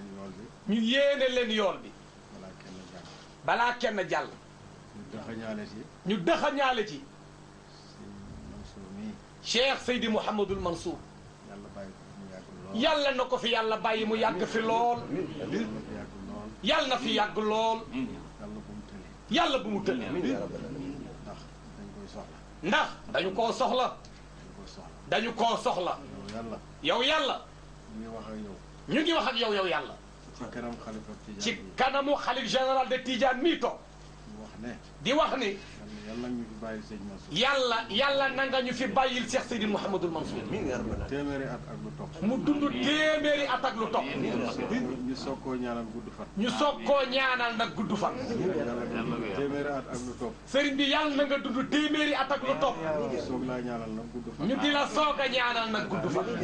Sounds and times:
Speech: 0.0s - 4.4s, 5.0s - 7.1s, 7.8s - 56.4s.

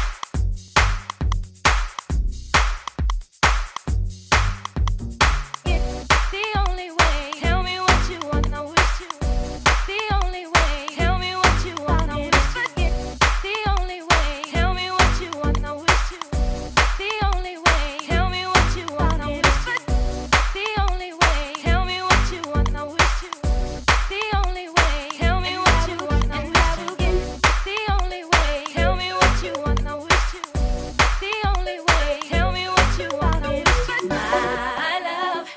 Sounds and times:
Music: 0.0s - 35.4s.

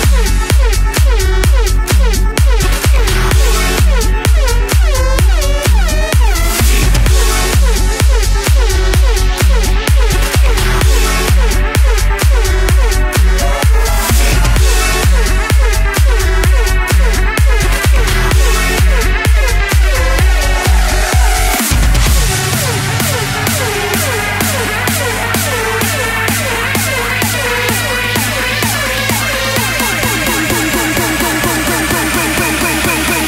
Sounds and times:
Music: 0.0s - 33.2s.

